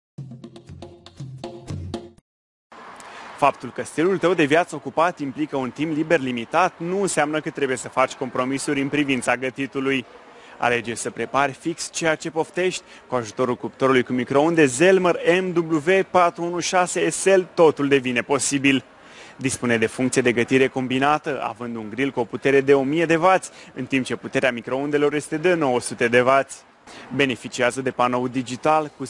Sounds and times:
Music: 0:00.2 - 0:02.2
Speech: 0:03.4 - 0:29.0.

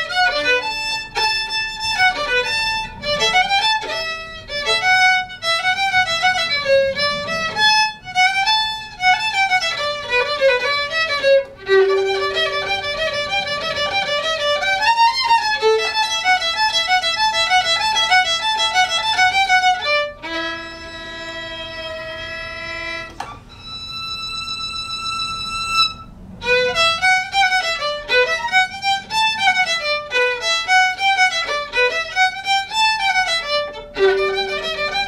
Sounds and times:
Violin, fiddle: 0:00.0 - 0:35.0.

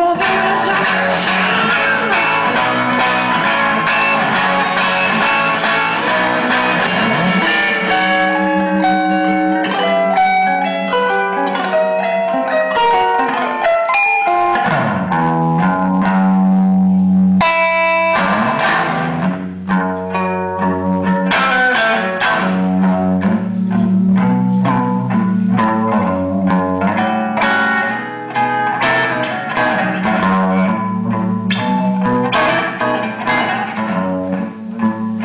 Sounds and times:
Guitar: 0:00.0 - 0:35.2.

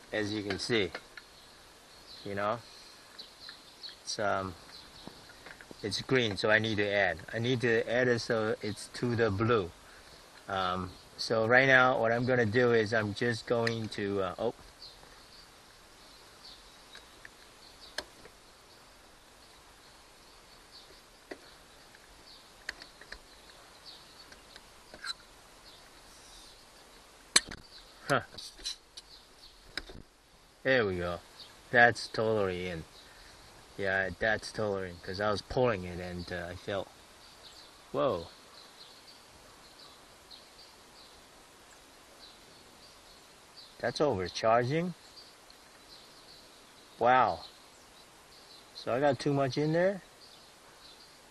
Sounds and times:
Speech: 0:00.1 - 0:01.0, 0:02.2 - 0:02.6, 0:04.1 - 0:04.6, 0:05.8 - 0:09.7, 0:10.5 - 0:14.6, 0:28.1 - 0:28.4, 0:30.7 - 0:32.9, 0:33.8 - 0:36.9, 0:38.0 - 0:38.3, 0:43.8 - 0:45.0, 0:47.0 - 0:47.4, 0:48.8 - 0:50.1.

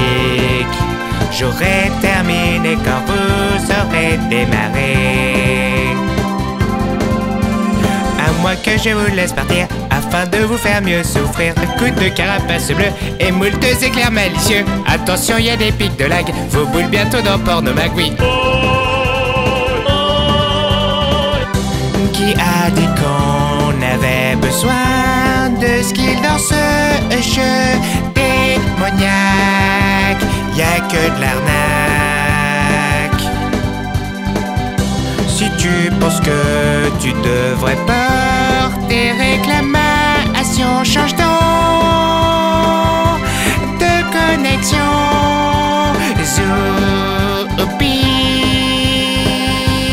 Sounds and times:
Music: 0:00.0 - 0:49.9.

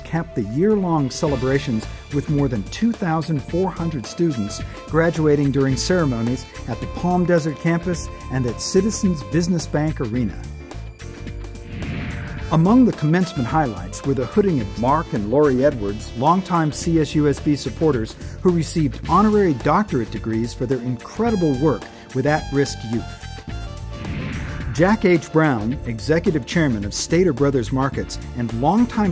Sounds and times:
Speech: 0:00.0 - 0:10.5, 0:12.5 - 0:23.2, 0:24.8 - 0:29.1
Music: 0:00.0 - 0:29.1.

